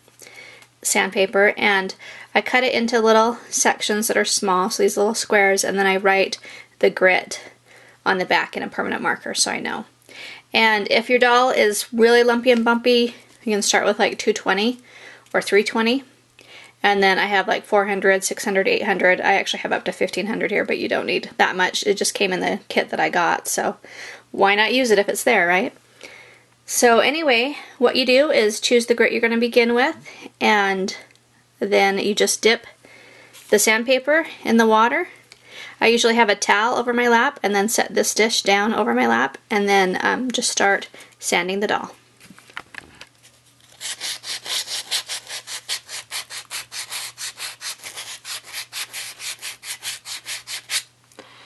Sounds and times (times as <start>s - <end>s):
Speech: 0.8s - 7.5s, 8.1s - 9.9s, 10.6s - 14.8s, 15.4s - 16.1s, 16.8s - 23.8s, 24.4s - 25.8s, 26.7s - 32.7s, 33.5s - 35.2s, 35.8s - 42.0s.